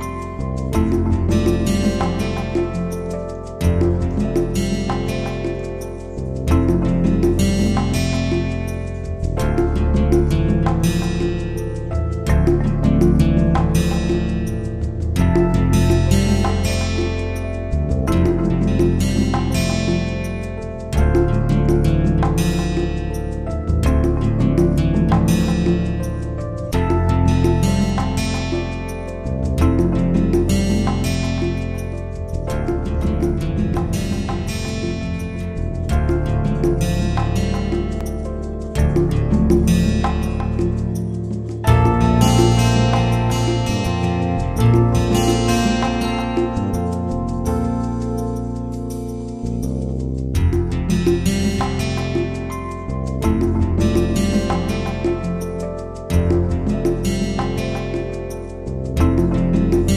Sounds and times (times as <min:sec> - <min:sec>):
Music: 0:00.0 - 0:59.9.